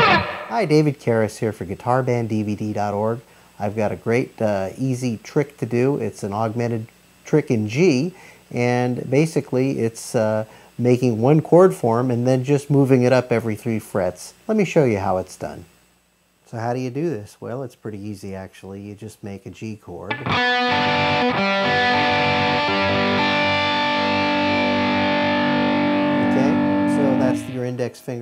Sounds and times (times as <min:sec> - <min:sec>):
Speech: 0:00.5 - 0:15.7, 0:16.5 - 0:20.2, 0:26.2 - 0:28.2.